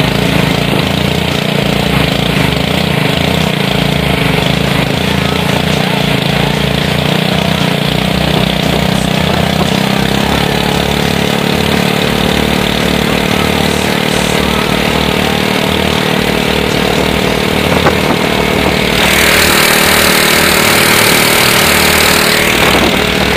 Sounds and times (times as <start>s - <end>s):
Motorboat, speedboat: 0.0s - 23.3s.